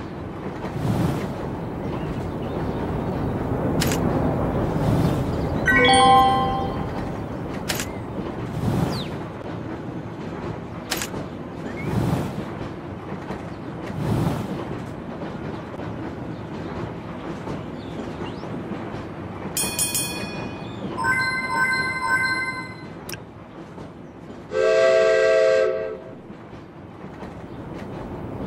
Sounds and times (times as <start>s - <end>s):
Clickety-clack: 0.0s - 4.5s, 7.0s - 20.6s, 26.2s - 28.4s
Railroad car, train wagon: 0.0s - 28.4s
Train horn: 24.5s - 26.2s.